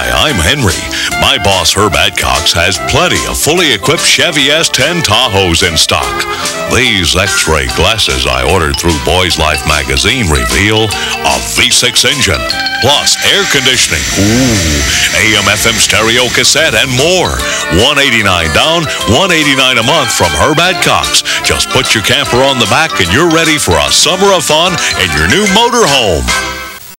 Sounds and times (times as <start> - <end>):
Speech: 0.0 - 26.4
Music: 0.0 - 26.9.